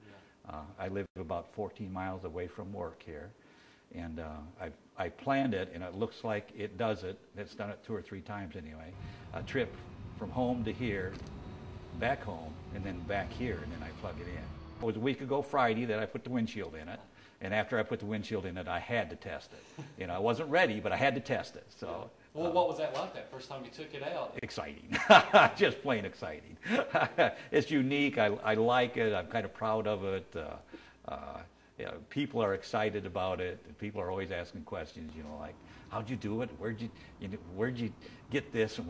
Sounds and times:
Speech: 0:00.0 - 0:11.2, 0:11.9 - 0:24.9, 0:25.5 - 0:26.6, 0:27.5 - 0:38.8
Car passing by: 0:08.9 - 0:16.2, 0:35.2 - 0:38.8.

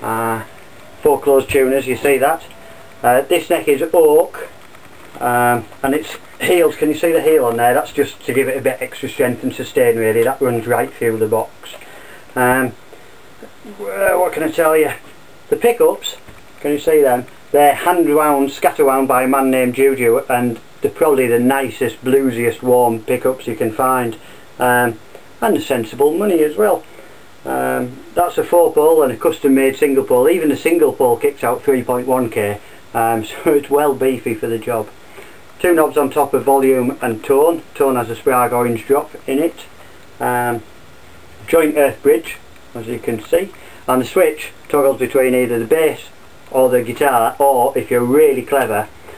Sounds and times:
Speech: 0:00.0 - 0:04.6, 0:05.2 - 0:11.8, 0:12.4 - 0:12.8, 0:13.4 - 0:35.0, 0:35.6 - 0:40.7, 0:41.4 - 0:48.9.

